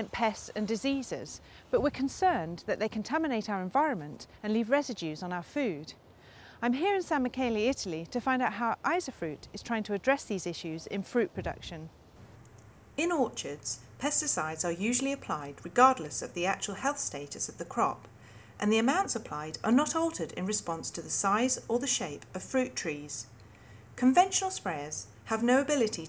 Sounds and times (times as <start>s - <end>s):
Speech: 0.0s - 6.0s, 6.6s - 11.9s, 13.0s - 23.3s, 24.0s - 26.0s.